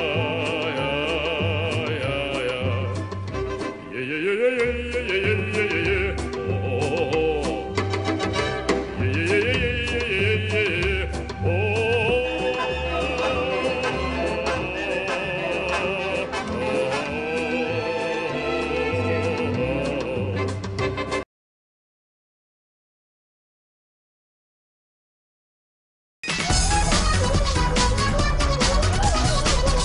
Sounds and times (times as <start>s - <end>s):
Music: 0.0s - 21.3s, 26.2s - 29.8s.